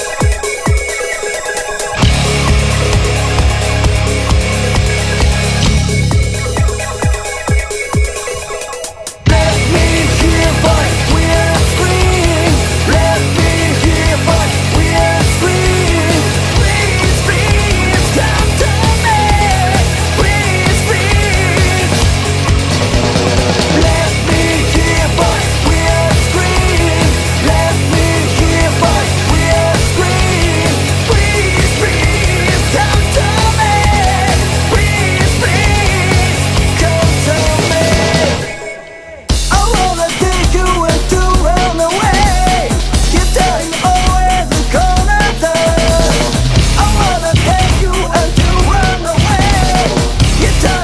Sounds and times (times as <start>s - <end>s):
Angry music: 0.0s - 50.8s.